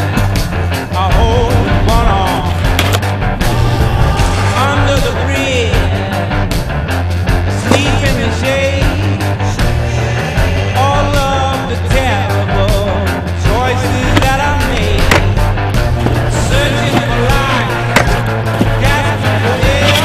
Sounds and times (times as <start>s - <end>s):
Music: 0.0s - 20.0s
Skateboard: 2.5s - 3.7s, 13.9s - 20.0s.